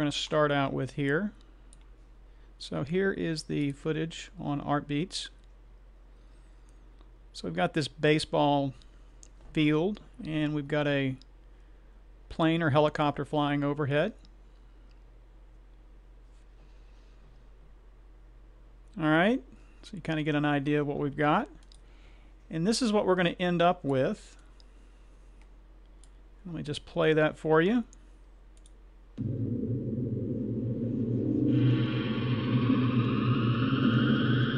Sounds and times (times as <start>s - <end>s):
Speech: 0.0s - 1.4s, 2.6s - 5.4s, 7.3s - 8.8s, 9.5s - 11.2s, 12.3s - 14.2s, 19.0s - 21.6s, 22.5s - 24.4s, 26.4s - 28.0s.